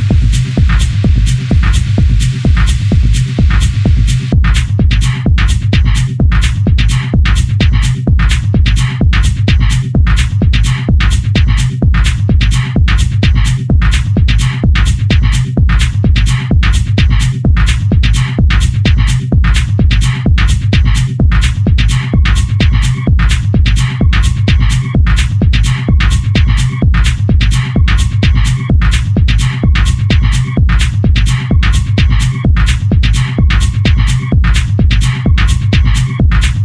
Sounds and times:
Music: 0.0s - 36.6s.

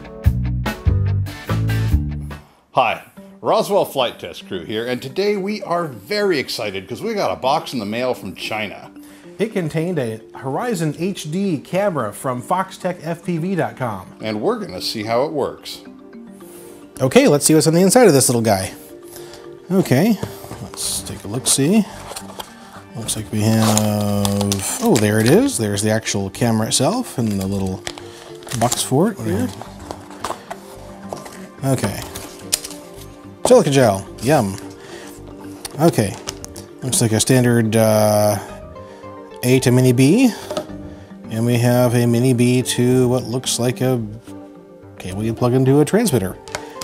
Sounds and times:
Music: 0.0s - 46.8s
Speech: 2.8s - 15.8s, 17.0s - 18.8s, 19.7s - 21.9s, 22.9s - 27.8s, 28.5s - 29.6s, 31.6s - 32.0s, 35.8s - 36.2s, 36.8s - 38.5s, 39.4s - 40.4s, 41.3s - 44.2s, 45.0s - 46.4s.

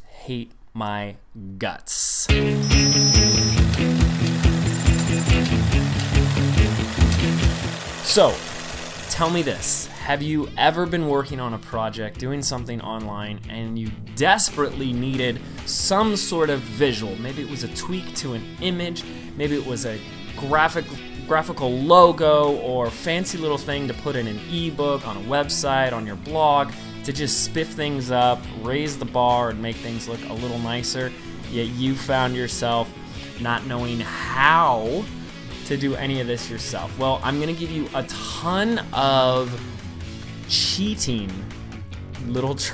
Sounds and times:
Speech: 0.0s - 2.4s, 8.1s - 8.4s, 9.1s - 39.6s, 40.5s - 41.5s, 42.2s - 42.7s
Music: 2.3s - 42.7s.

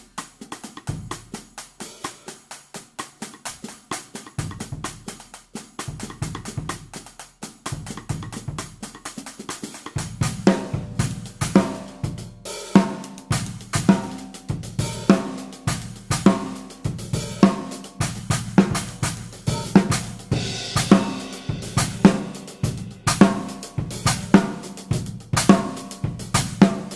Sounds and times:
Drum kit: 0.0s - 26.9s
Hi-hat: 0.0s - 26.9s
Bass drum: 0.8s - 1.6s, 4.4s - 5.2s, 5.9s - 7.0s, 7.7s - 9.0s, 10.0s - 26.9s.

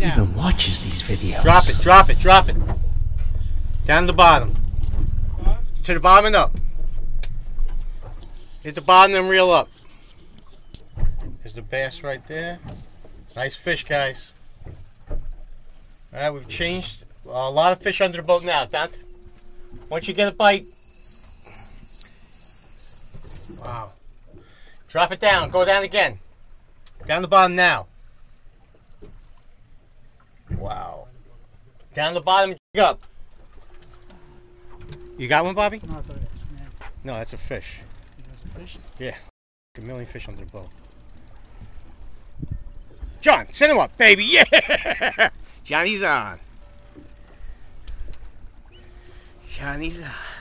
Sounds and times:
Cricket: 20.5s - 23.6s.

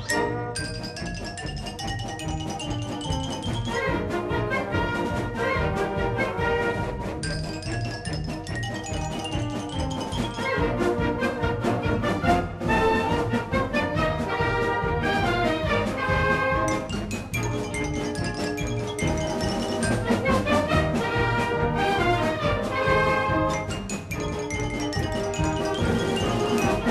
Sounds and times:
Marimba, xylophone: 0.0s - 4.8s, 7.0s - 11.3s, 15.9s - 26.9s.

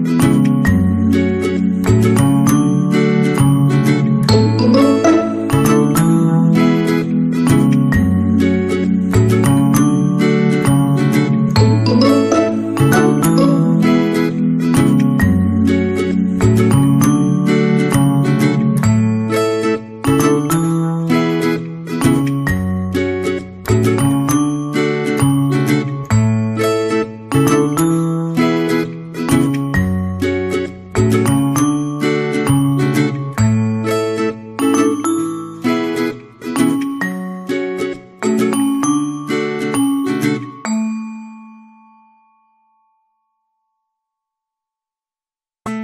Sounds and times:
Marimba, xylophone: 0.0s - 42.2s
Glockenspiel: 0.0s - 44.1s.

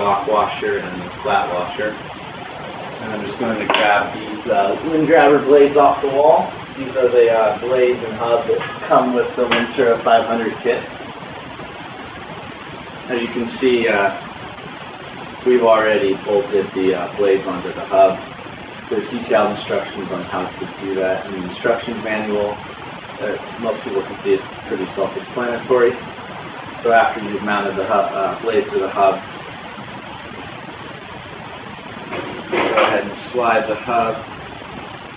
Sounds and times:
Speech: 0.0s - 2.0s, 3.0s - 10.9s, 13.1s - 14.2s, 15.4s - 18.3s, 18.9s - 22.6s, 23.2s - 26.0s, 26.8s - 29.3s, 32.5s - 34.3s.

